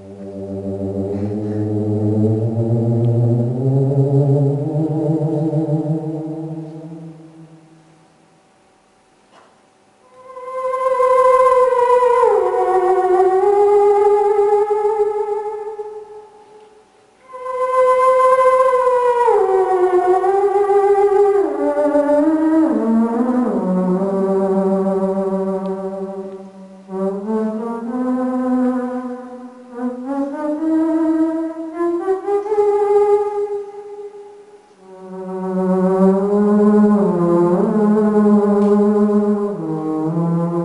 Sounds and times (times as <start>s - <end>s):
Music: 0.0s - 40.6s.